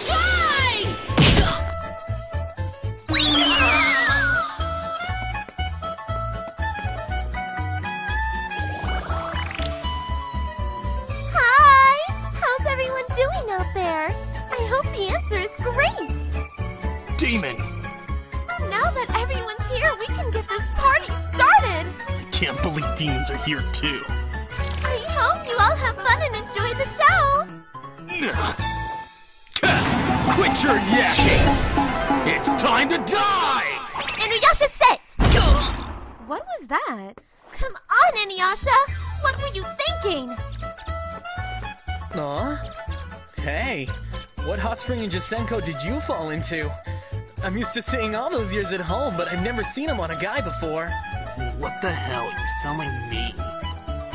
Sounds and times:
Music: 0.0s - 34.5s, 38.5s - 54.1s.

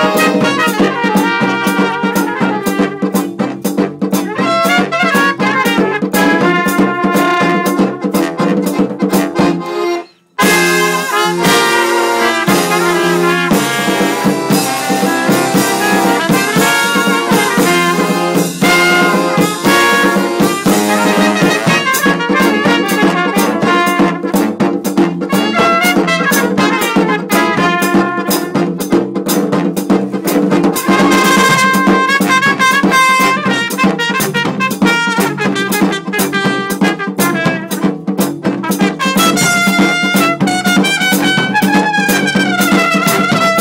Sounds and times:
Guitar: 0.0s - 29.3s, 30.4s - 43.6s.

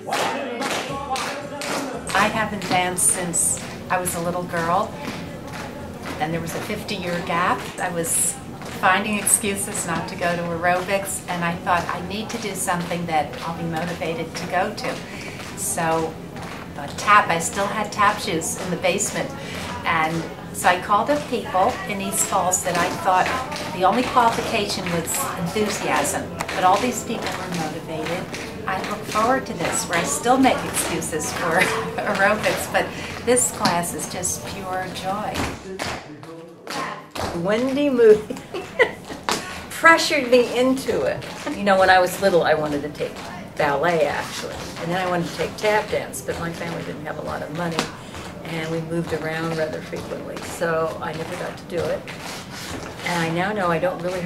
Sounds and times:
Female speech, woman speaking: 2.1s - 5.2s, 6.0s - 35.6s, 36.7s - 52.1s, 53.0s - 54.2s.

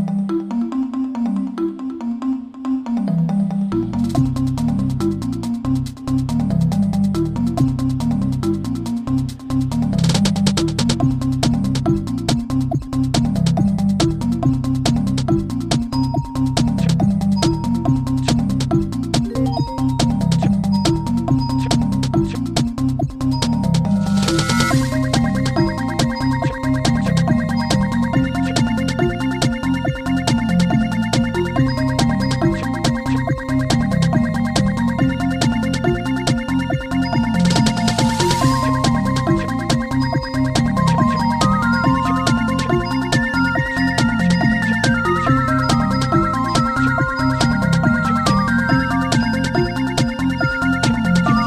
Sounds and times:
Music: 0.0s - 51.4s.

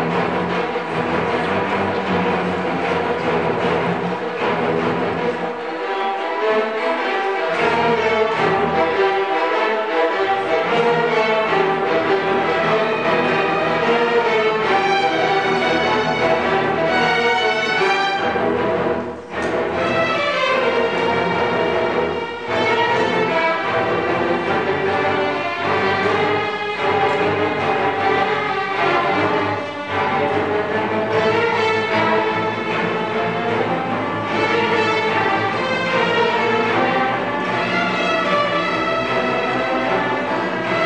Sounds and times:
Orchestra: 0.0s - 40.8s.

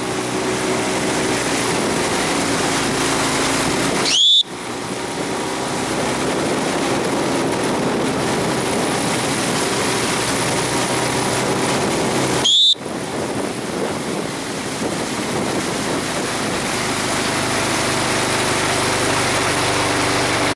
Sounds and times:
Rowboat, canoe, kayak: 0.0s - 20.5s.

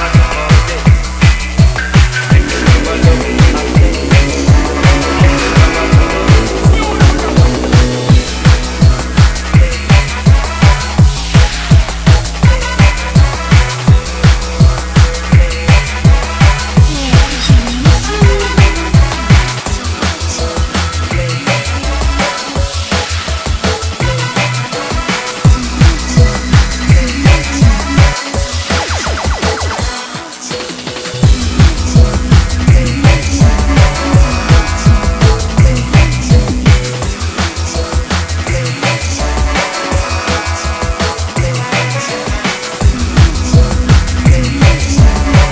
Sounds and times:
Drum and bass: 0.0s - 45.5s.

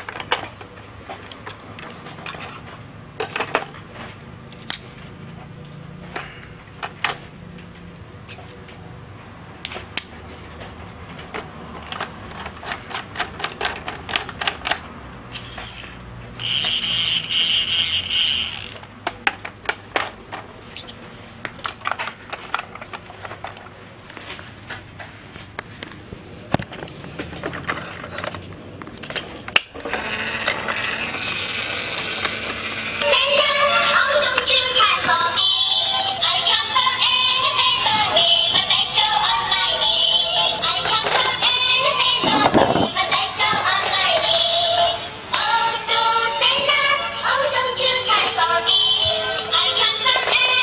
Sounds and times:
Vehicle: 0.0s - 50.6s.

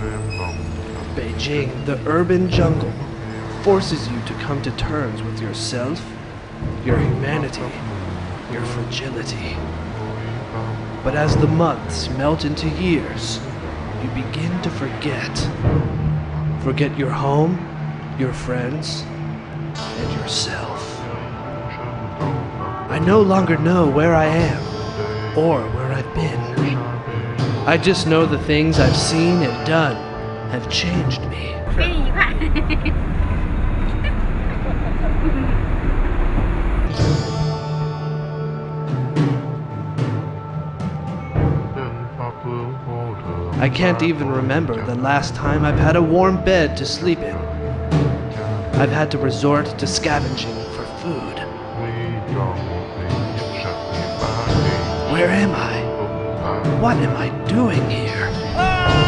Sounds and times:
Speech: 0.0s - 3.0s, 3.6s - 6.1s, 6.8s - 7.8s, 8.5s - 9.6s, 11.1s - 15.5s, 16.6s - 17.6s, 18.2s - 19.1s, 20.0s - 24.7s, 25.4s - 26.9s, 27.7s - 32.9s, 34.0s - 35.6s, 41.8s - 47.4s, 48.8s - 59.0s.

